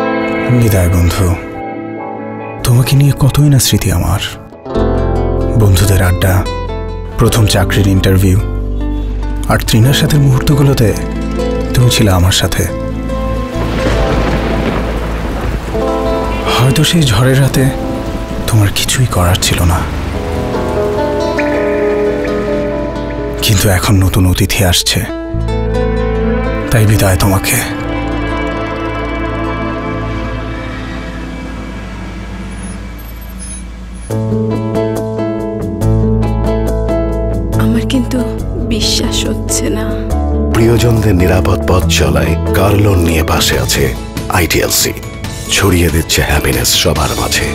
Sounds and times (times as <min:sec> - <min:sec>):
Music: 0:00.0 - 0:47.5
Speech: 0:00.4 - 0:01.5, 0:02.6 - 0:04.4, 0:05.6 - 0:06.5, 0:07.2 - 0:08.5, 0:09.5 - 0:11.0, 0:11.7 - 0:12.8, 0:16.4 - 0:17.8, 0:18.5 - 0:19.9, 0:23.4 - 0:25.2, 0:26.7 - 0:27.8, 0:37.6 - 0:47.5
Car: 0:30.9 - 0:34.6.